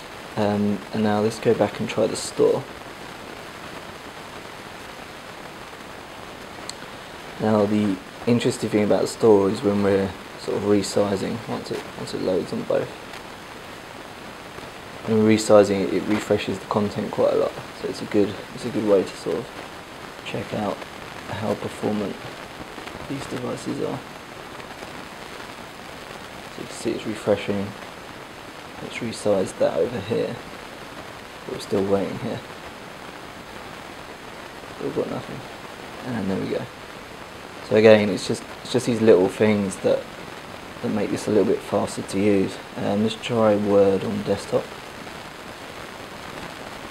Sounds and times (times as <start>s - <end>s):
Rain: 0.0s - 46.9s.